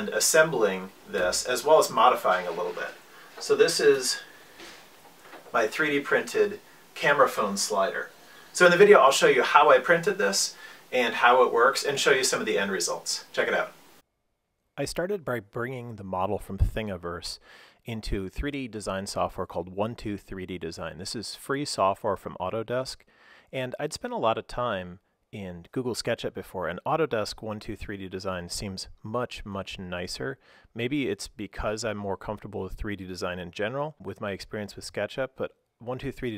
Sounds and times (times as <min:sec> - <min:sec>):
Speech: 0:00.0 - 0:04.3, 0:05.5 - 0:13.8, 0:14.8 - 0:36.3.